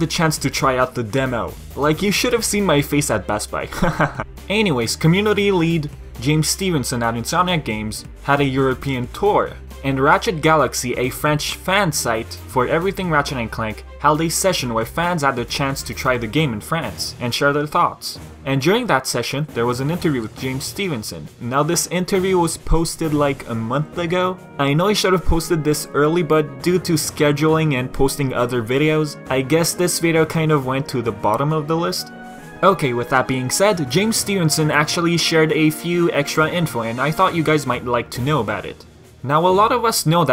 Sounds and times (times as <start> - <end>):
Music: 0.0 - 40.3
Speech: 0.0 - 40.3.